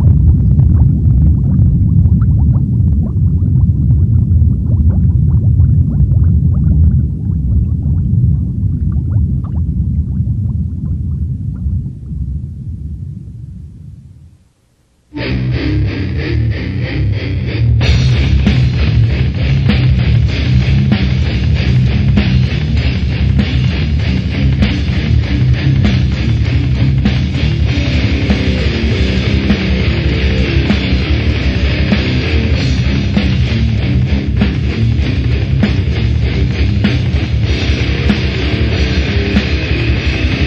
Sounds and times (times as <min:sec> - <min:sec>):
Boiling: 0:00.0 - 0:12.9.